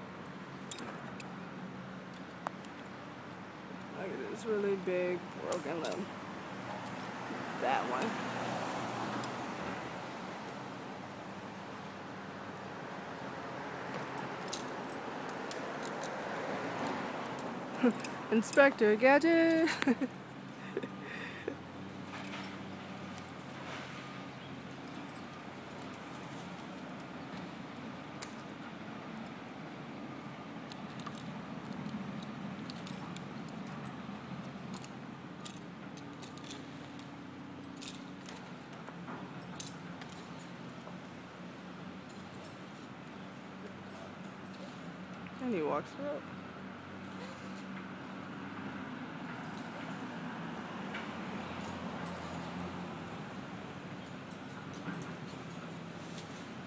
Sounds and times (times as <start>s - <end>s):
Speech: 7.6s - 8.2s, 18.3s - 19.7s, 45.4s - 46.2s.